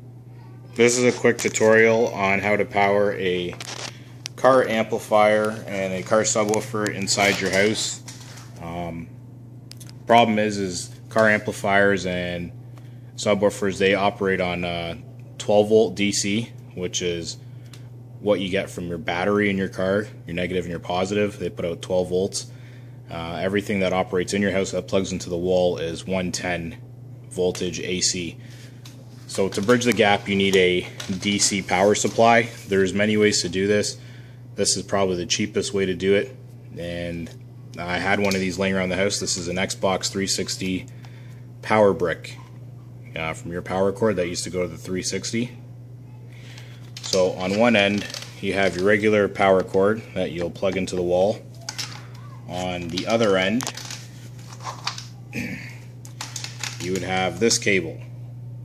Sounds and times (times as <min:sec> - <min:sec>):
Speech: 0:00.4 - 0:03.6, 0:04.4 - 0:09.1, 0:10.1 - 0:12.6, 0:13.2 - 0:17.4, 0:18.2 - 0:22.5, 0:23.1 - 0:28.4, 0:29.3 - 0:34.0, 0:34.6 - 0:40.9, 0:41.6 - 0:42.5, 0:43.1 - 0:45.6, 0:47.1 - 0:51.5, 0:52.2 - 0:53.8, 0:56.8 - 0:58.1.